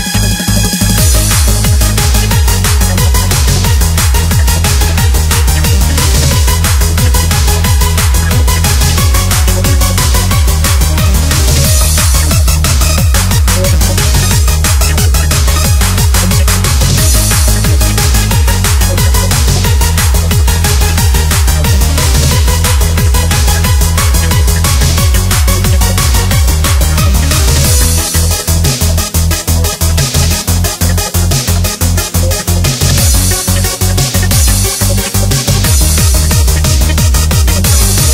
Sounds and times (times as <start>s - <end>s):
Music: 0.0s - 38.1s.